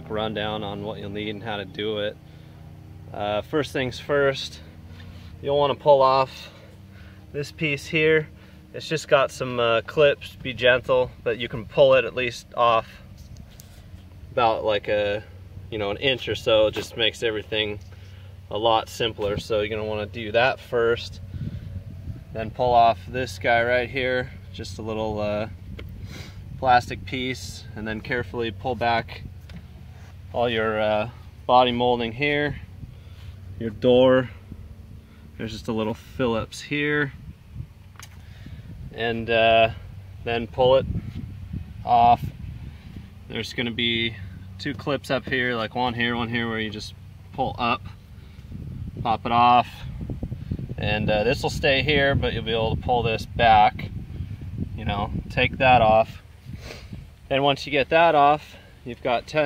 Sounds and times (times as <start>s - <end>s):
Speech: 0.0s - 2.2s, 3.1s - 4.7s, 5.4s - 6.6s, 7.3s - 13.0s, 14.4s - 17.8s, 18.5s - 21.2s, 22.4s - 25.5s, 26.6s - 29.2s, 30.3s - 32.6s, 33.6s - 34.4s, 35.4s - 37.2s, 39.0s - 40.9s, 41.8s - 42.3s, 43.3s - 48.0s, 49.0s - 49.9s, 50.8s - 53.9s, 54.8s - 56.2s, 57.3s - 59.4s.